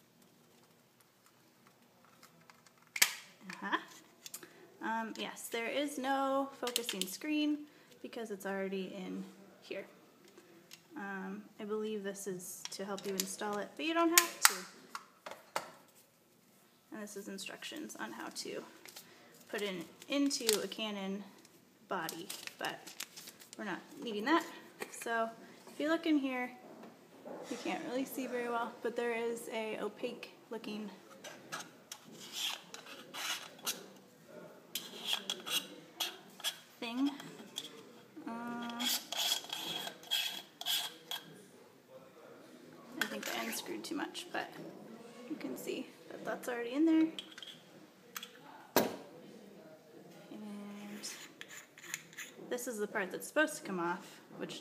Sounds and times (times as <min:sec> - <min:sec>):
Speech: 0:27.5 - 0:31.0, 0:41.1 - 0:47.2, 0:52.5 - 0:54.6.